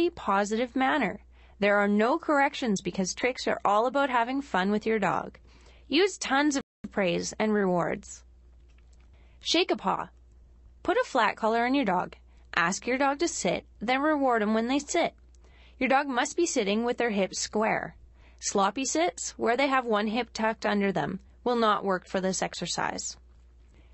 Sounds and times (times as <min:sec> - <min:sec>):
Speech: 0:00.0 - 0:08.2, 0:09.4 - 0:10.1, 0:10.8 - 0:15.1, 0:15.8 - 0:23.2.